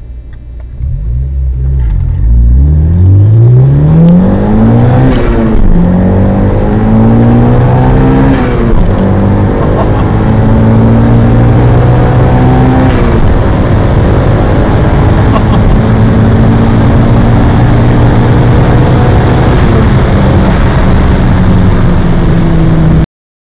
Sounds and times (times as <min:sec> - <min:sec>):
Medium engine (mid frequency): 0:00.0 - 0:23.0
Car: 0:00.0 - 0:23.1
Accelerating, revving, vroom: 0:01.1 - 0:23.0.